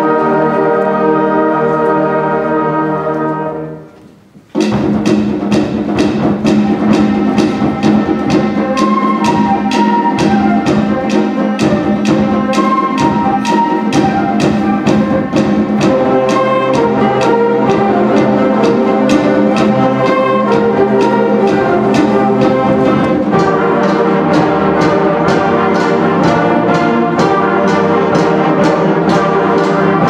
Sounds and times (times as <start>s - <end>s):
Inside, large room or hall: 0.0s - 30.0s
Music: 0.0s - 30.0s.